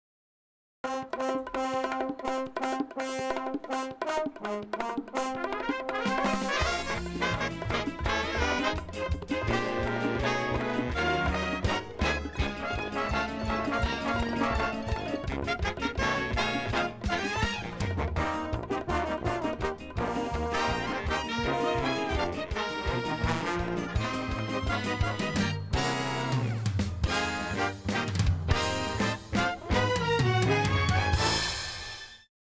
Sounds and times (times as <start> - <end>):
Music: 0.8 - 32.3.